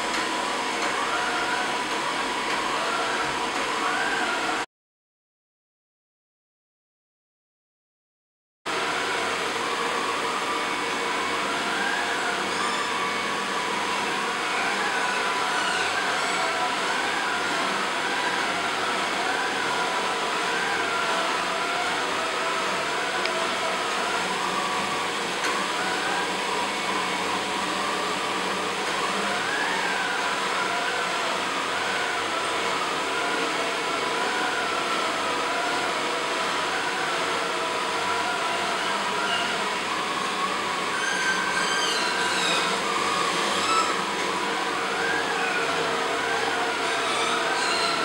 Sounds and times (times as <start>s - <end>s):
Vacuum cleaner: 0.0s - 4.7s, 8.7s - 48.0s.